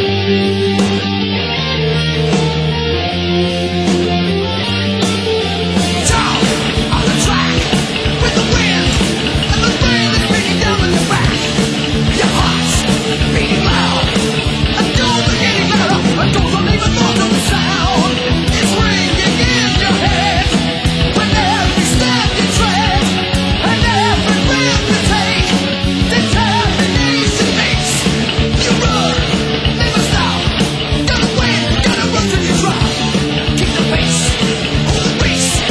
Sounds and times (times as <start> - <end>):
Punk rock: 0.0 - 35.7.